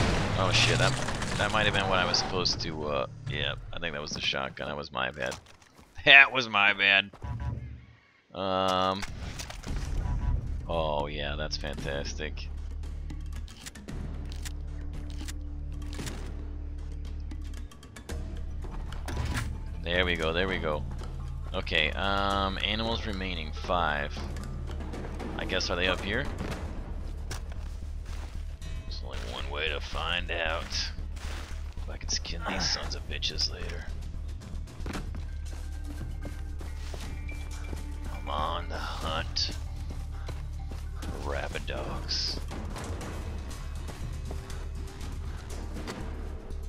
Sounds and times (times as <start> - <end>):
Music: 0.0 - 5.3, 8.7 - 46.6
Speech: 0.4 - 5.4, 6.0 - 7.1, 8.4 - 9.0, 10.7 - 12.5, 19.9 - 20.8, 21.6 - 24.3, 25.4 - 26.3, 28.9 - 31.0, 31.9 - 33.9, 38.2 - 39.6, 41.1 - 42.4.